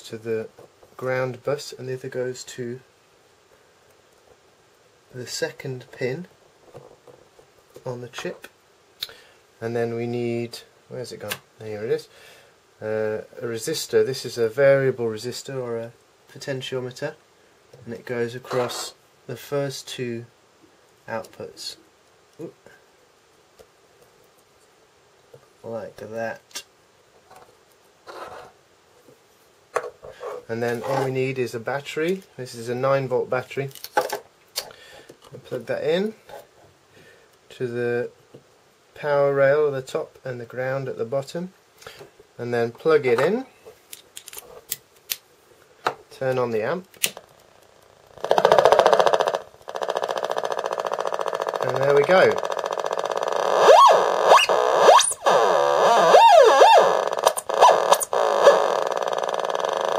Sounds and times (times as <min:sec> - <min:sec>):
Speech: 0:00.0 - 0:02.9, 0:05.1 - 0:06.3, 0:07.8 - 0:08.5, 0:09.6 - 0:12.1, 0:12.8 - 0:17.2, 0:17.8 - 0:20.4, 0:21.1 - 0:21.8, 0:22.4 - 0:22.8, 0:25.6 - 0:26.7, 0:30.5 - 0:33.8, 0:35.3 - 0:36.3, 0:37.5 - 0:38.2, 0:39.0 - 0:41.6, 0:42.4 - 0:43.6, 0:46.1 - 0:46.9, 0:51.6 - 0:52.4.